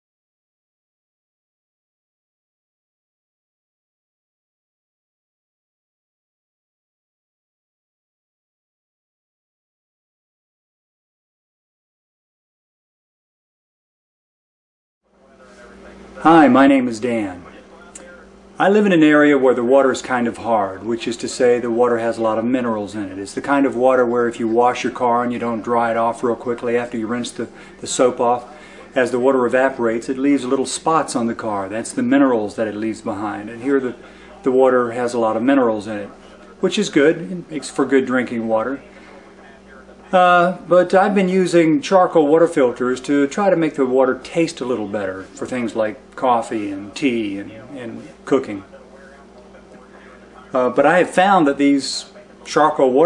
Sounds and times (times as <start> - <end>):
Speech: 15.1 - 53.0.